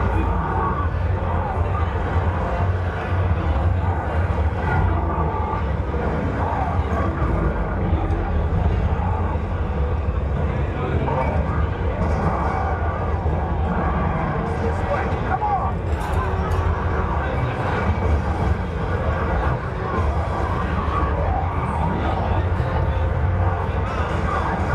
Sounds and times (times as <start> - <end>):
Speech: 10.4 - 24.7.